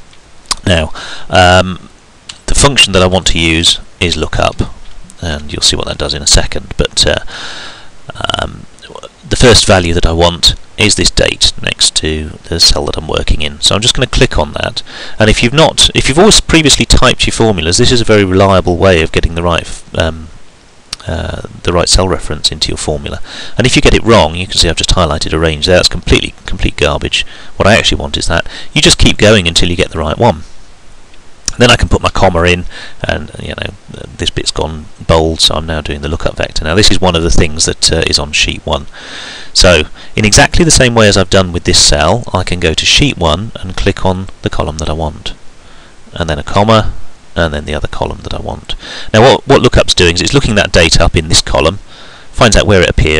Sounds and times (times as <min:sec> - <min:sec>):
Speech: 0:00.5 - 0:07.3, 0:08.1 - 0:20.3, 0:21.0 - 0:30.5, 0:31.5 - 0:38.9, 0:39.6 - 0:45.4, 0:46.1 - 0:51.8, 0:52.4 - 0:53.1.